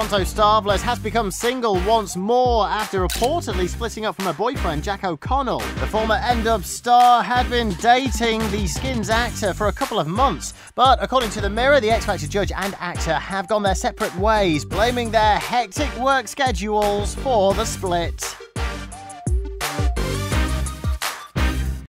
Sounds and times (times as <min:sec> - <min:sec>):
Speech: 0:00.0 - 0:18.4
Music: 0:00.0 - 0:21.9.